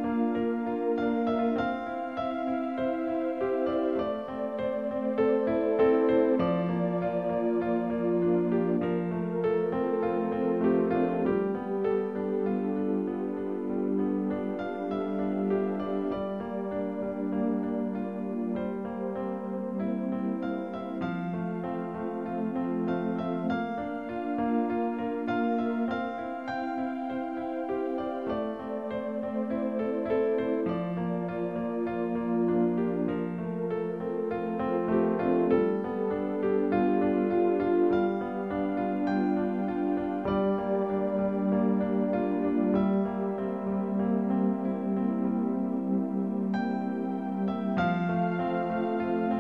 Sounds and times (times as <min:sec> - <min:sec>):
Music: 0:00.0 - 0:49.4.